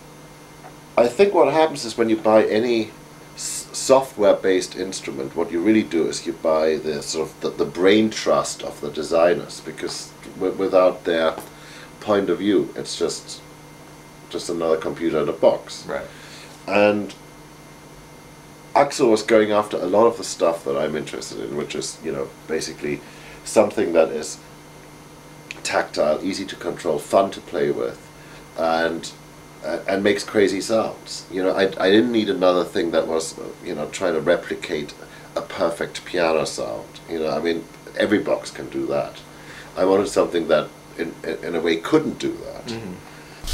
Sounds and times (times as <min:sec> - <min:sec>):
Speech: 0:01.0 - 0:13.4, 0:14.3 - 0:17.2, 0:18.7 - 0:24.4, 0:25.5 - 0:28.0, 0:28.6 - 0:43.5.